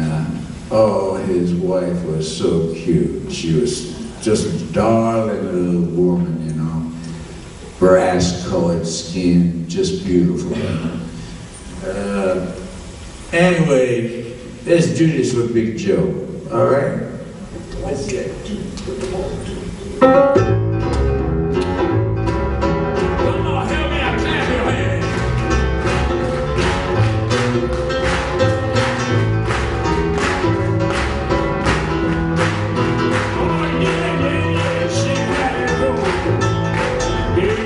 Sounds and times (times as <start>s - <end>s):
Male speech, man speaking: 0.0s - 6.9s, 7.8s - 11.0s, 11.8s - 12.6s, 13.3s - 19.7s, 23.3s - 25.0s.